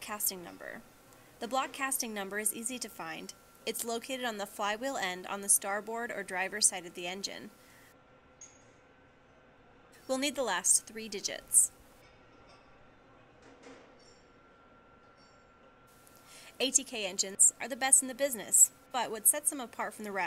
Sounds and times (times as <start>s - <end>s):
Speech: 0.0s - 0.8s, 1.4s - 7.5s, 10.1s - 11.7s, 16.6s - 20.2s.